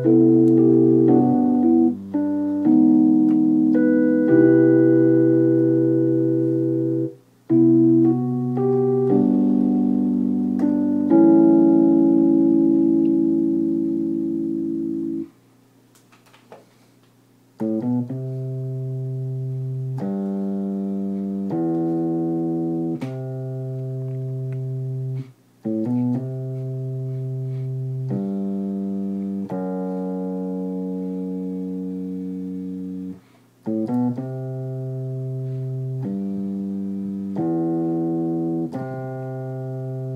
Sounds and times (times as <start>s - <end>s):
Music: 0.0s - 15.3s, 17.6s - 40.1s.